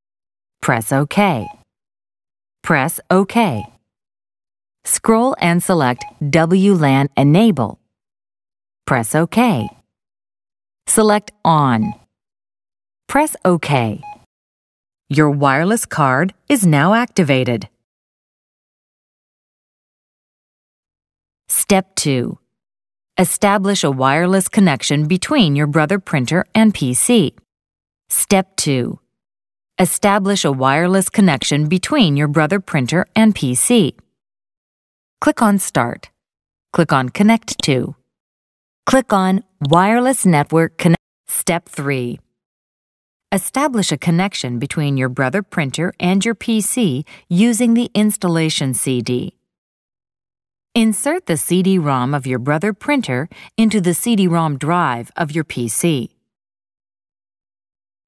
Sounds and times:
Speech: 0:00.6 - 0:01.6, 0:02.6 - 0:03.8, 0:04.9 - 0:07.8, 0:08.9 - 0:09.8, 0:10.9 - 0:12.0, 0:13.1 - 0:14.1, 0:15.1 - 0:17.8, 0:21.5 - 0:22.4, 0:23.2 - 0:27.4, 0:28.1 - 0:29.0, 0:29.8 - 0:34.0, 0:35.2 - 0:36.1, 0:36.8 - 0:38.0, 0:38.9 - 0:42.2, 0:43.4 - 0:49.4, 0:50.8 - 0:56.2.

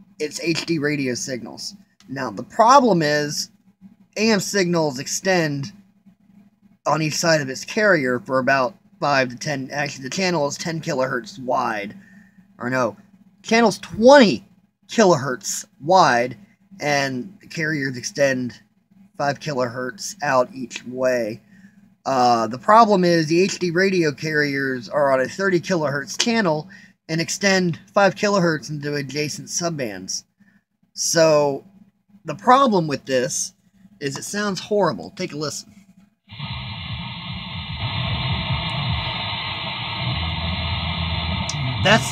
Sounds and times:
Speech: 0:00.2 - 0:03.5, 0:04.2 - 0:05.8, 0:06.9 - 0:12.0, 0:12.6 - 0:18.6, 0:19.2 - 0:21.4, 0:22.1 - 0:30.3, 0:31.0 - 0:31.6, 0:32.3 - 0:35.7, 0:41.8 - 0:42.1.

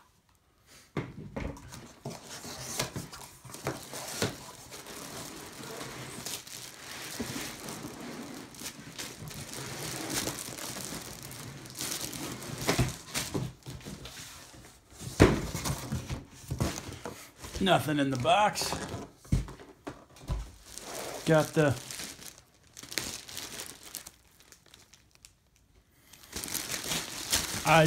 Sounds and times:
Inside, small room: 0:00.0 - 0:27.8
Crumpling, crinkling: 0:02.0 - 0:14.6, 0:20.5 - 0:27.8
Speech: 0:17.6 - 0:18.9, 0:21.2 - 0:21.8, 0:27.6 - 0:27.8.

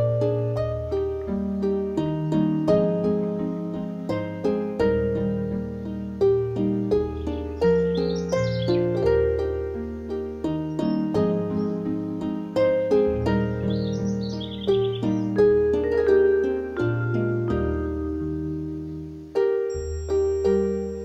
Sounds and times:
Lullaby: 0:00.0 - 0:21.0.

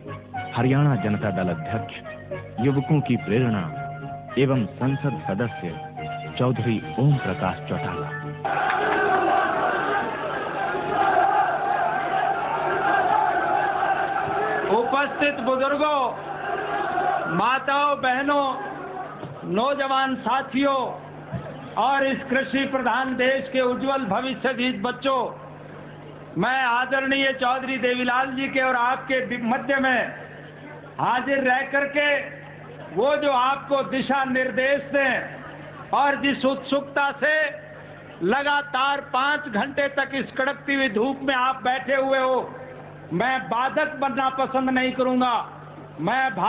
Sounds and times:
Male speech, man speaking: 0:00.6 - 0:02.0, 0:02.6 - 0:03.8, 0:04.4 - 0:05.8, 0:06.4 - 0:08.1, 0:14.7 - 0:16.2, 0:17.3 - 0:18.6, 0:19.4 - 0:21.0, 0:21.8 - 0:25.4, 0:26.4 - 0:37.6, 0:38.2 - 0:46.4.

